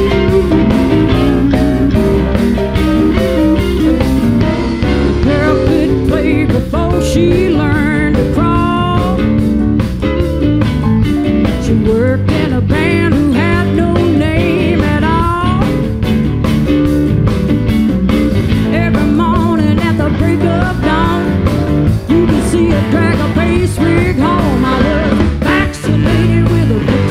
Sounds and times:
Blues: 0.0s - 27.1s.

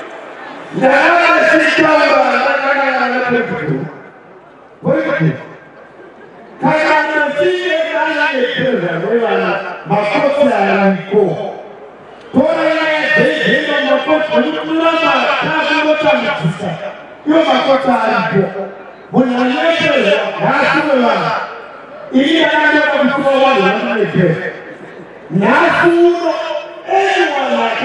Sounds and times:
Male speech, man speaking: 0.7s - 4.1s, 4.8s - 5.5s, 6.6s - 11.6s, 12.3s - 24.6s, 25.3s - 27.8s
Narration, monologue: 0.7s - 27.8s.

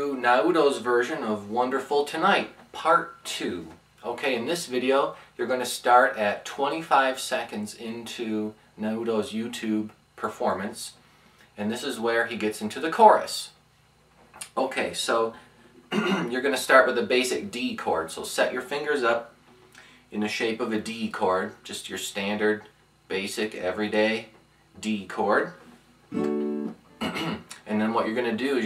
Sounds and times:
Speech: 0.0s - 11.0s, 11.6s - 13.6s, 14.4s - 19.4s, 20.1s - 25.7s, 27.2s - 28.6s.

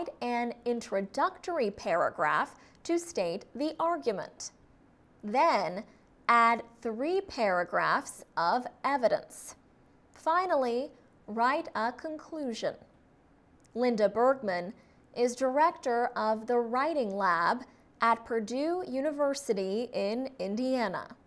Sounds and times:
Speech: 0.0s - 4.6s, 5.2s - 9.6s, 10.2s - 12.8s, 13.7s - 21.2s.

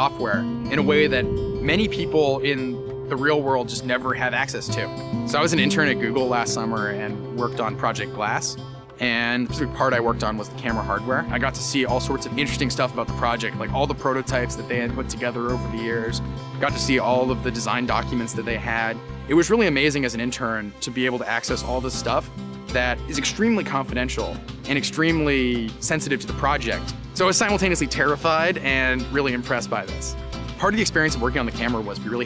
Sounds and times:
Music: 0.0s - 32.2s
Speech: 0.0s - 32.2s.

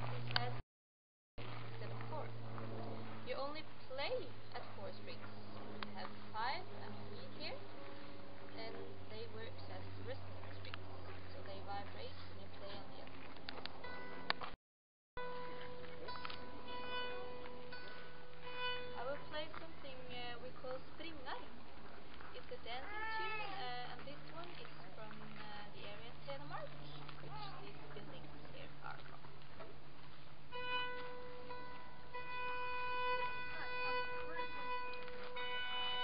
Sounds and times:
Speech: 3.3s - 5.3s, 6.0s - 7.6s, 8.6s - 13.1s, 19.0s - 21.5s, 22.4s - 29.1s
Violin, fiddle: 15.3s - 21.5s, 22.6s - 25.6s, 30.5s - 36.0s.

